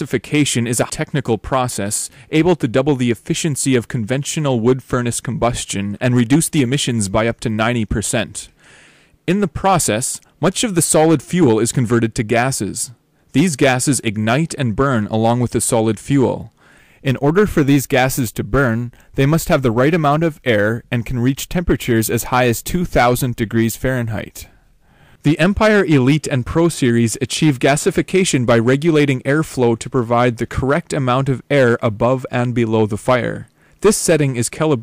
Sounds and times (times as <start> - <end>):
Speech: 0.0 - 8.6, 9.3 - 24.6, 25.2 - 34.8.